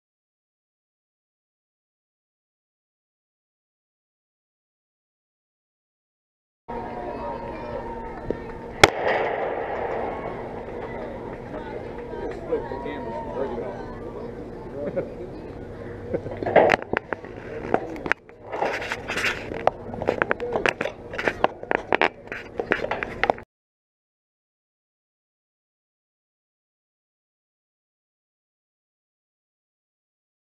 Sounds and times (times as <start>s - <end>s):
Speech: 6.7s - 8.7s, 20.2s - 23.2s.